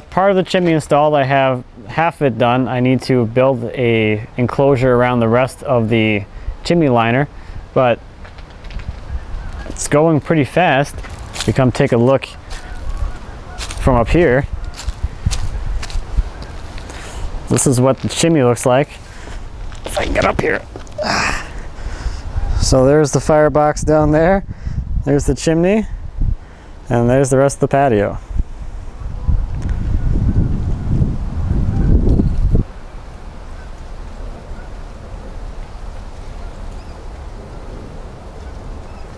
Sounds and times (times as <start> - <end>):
Speech: 0.1 - 8.0, 9.6 - 14.5, 17.5 - 19.0, 19.8 - 21.2, 22.6 - 24.4, 25.0 - 25.9, 26.9 - 28.2.